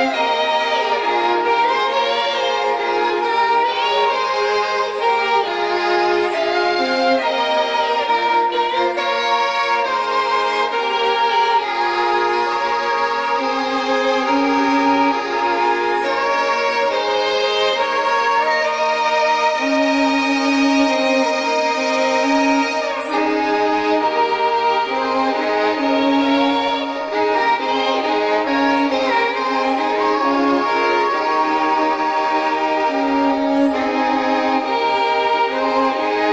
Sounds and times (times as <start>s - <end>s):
Violin, fiddle: 0.0s - 36.3s.